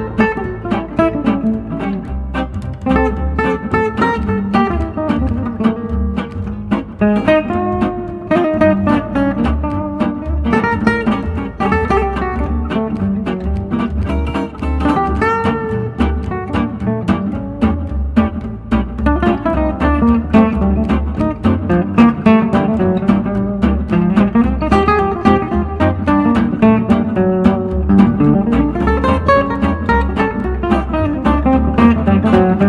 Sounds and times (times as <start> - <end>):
Jazz: 0.0 - 32.6
Strum: 0.0 - 32.6.